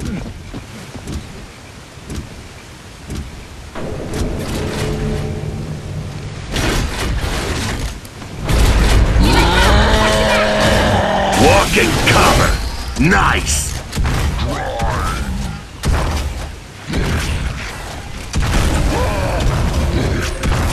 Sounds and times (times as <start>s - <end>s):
Speech: 11.3s - 13.8s.